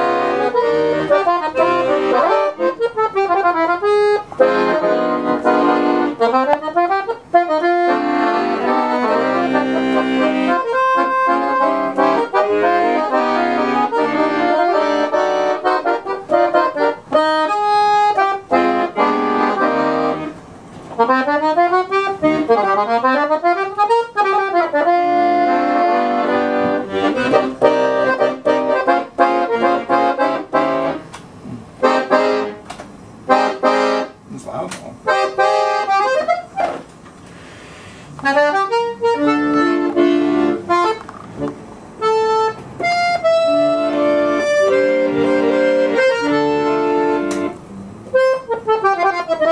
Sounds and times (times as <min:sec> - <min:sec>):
Music: 0:00.0 - 0:20.4, 0:21.0 - 0:31.1, 0:31.8 - 0:32.7, 0:33.3 - 0:34.2, 0:35.1 - 0:36.8, 0:38.2 - 0:49.5.